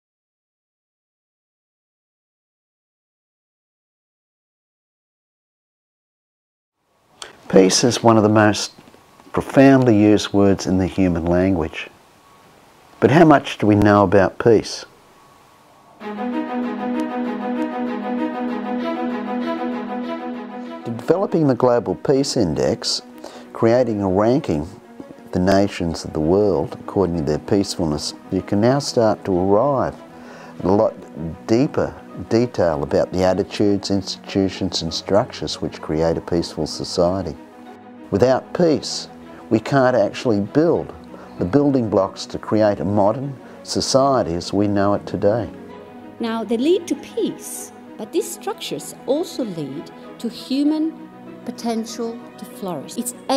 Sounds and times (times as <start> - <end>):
Speech: 7.5 - 8.8, 9.4 - 11.9, 13.0 - 14.9, 20.9 - 23.0, 23.6 - 29.9, 30.6 - 37.4, 38.1 - 45.5, 46.2 - 50.9, 51.5 - 53.3.